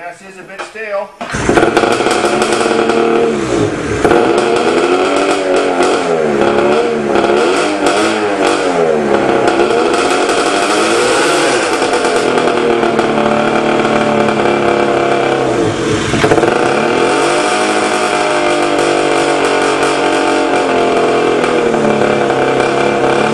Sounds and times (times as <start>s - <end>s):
Speech: 0.0s - 1.2s
Vehicle: 0.6s - 23.3s
Medium engine (mid frequency): 1.2s - 23.3s
Accelerating, revving, vroom: 1.4s - 23.3s.